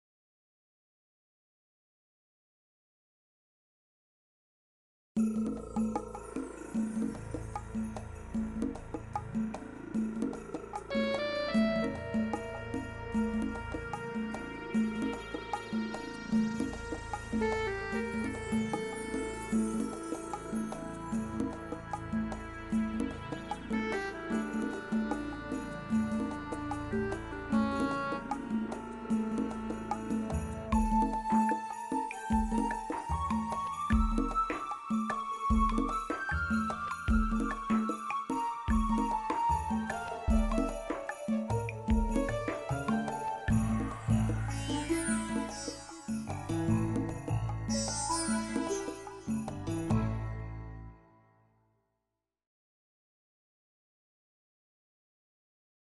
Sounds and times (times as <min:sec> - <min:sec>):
Music: 0:05.2 - 0:52.2.